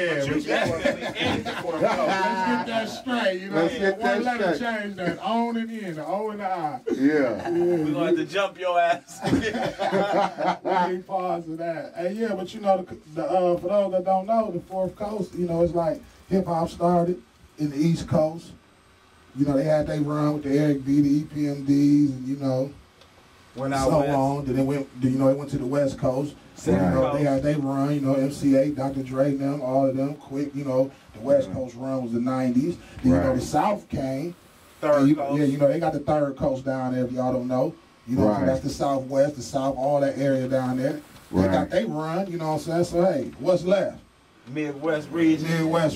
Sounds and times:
Speech: 0.0 - 9.3, 10.5 - 18.6, 19.4 - 22.8, 23.6 - 45.9.

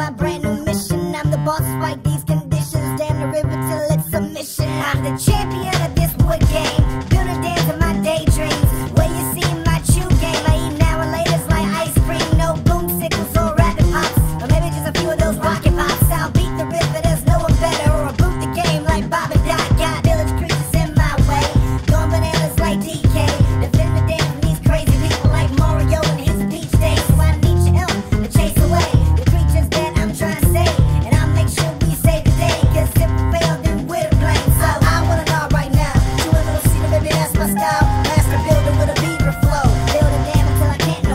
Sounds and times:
Music: 0.0 - 41.1.

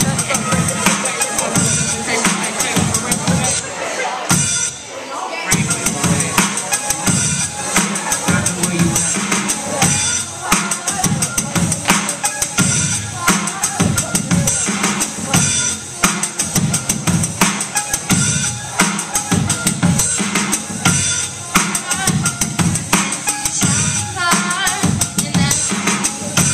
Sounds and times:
Music: 0.0 - 26.5
Female singing: 10.2 - 15.2, 21.6 - 22.2, 23.5 - 26.5.

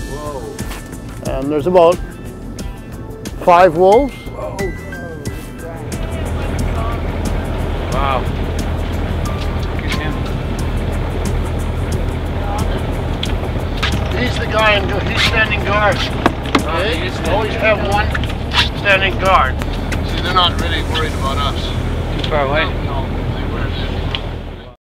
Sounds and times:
Music: 0.0 - 24.8
Speech: 18.9 - 24.0.

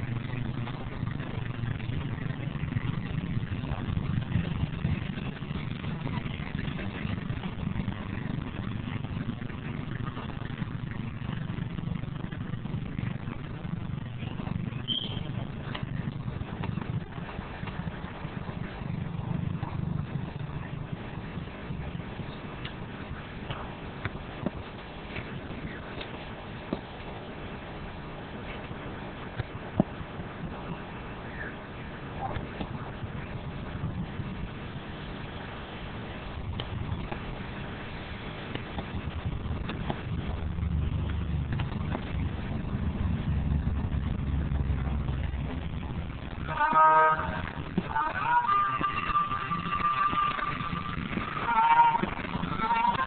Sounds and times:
Clip-clop: 0.0 - 53.0.

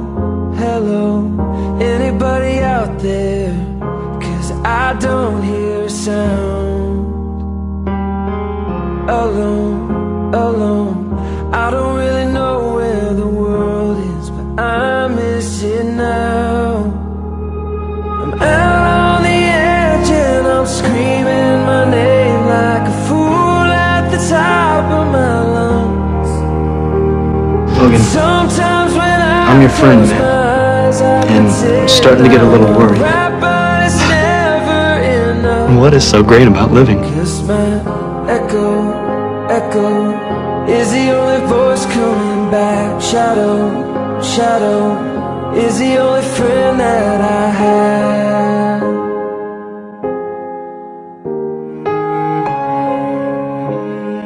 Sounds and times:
Music: 0.0 - 54.2.

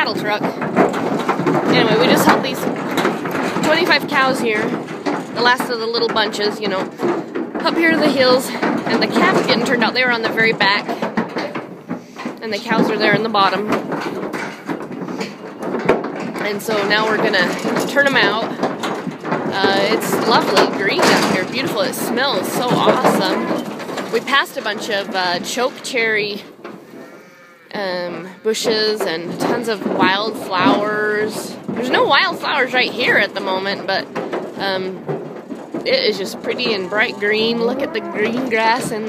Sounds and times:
Speech: 0.0 - 0.6, 1.7 - 2.8, 3.6 - 4.8, 5.4 - 6.9, 7.6 - 11.0, 12.4 - 13.8, 16.4 - 18.6, 19.5 - 26.5, 27.8 - 35.0, 35.8 - 39.0.

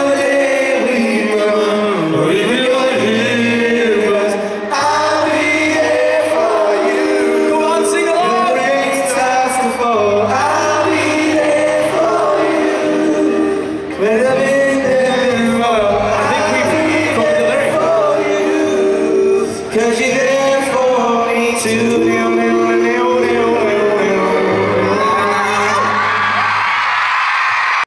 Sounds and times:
Male singing: 0.0 - 26.1
Choir: 0.0 - 27.8.

